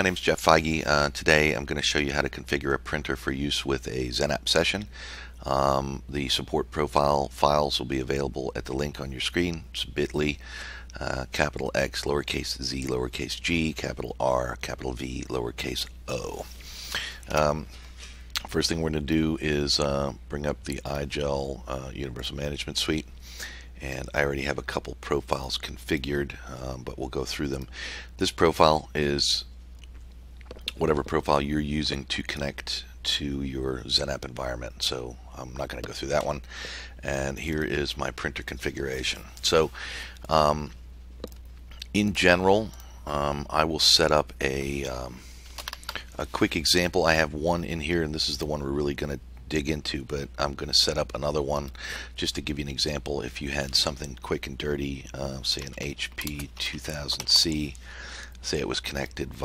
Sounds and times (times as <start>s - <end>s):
Speech: 0.0s - 17.7s, 18.4s - 23.1s, 23.8s - 29.5s, 30.7s - 40.8s, 41.8s - 45.2s, 46.0s - 57.8s, 58.4s - 59.4s.